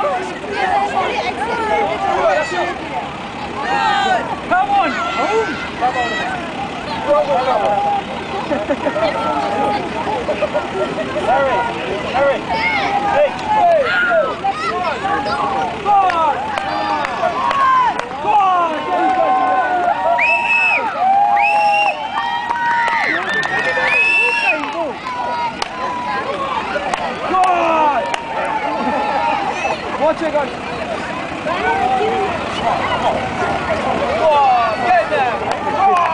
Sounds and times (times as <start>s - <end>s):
Truck: 0.0s - 36.1s.